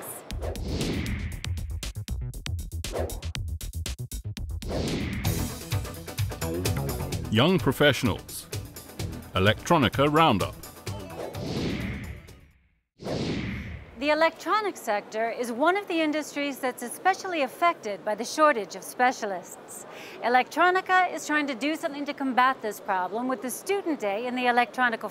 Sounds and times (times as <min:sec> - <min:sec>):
Speech: 0:07.3 - 0:08.5, 0:09.4 - 0:10.6.